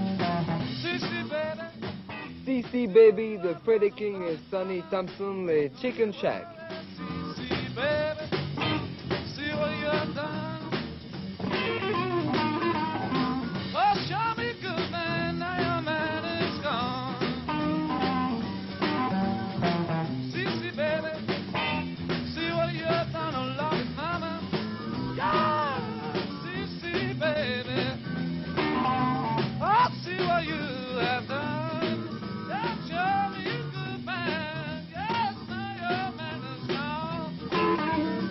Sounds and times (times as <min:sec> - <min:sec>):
Music: 0:00.0 - 0:38.3.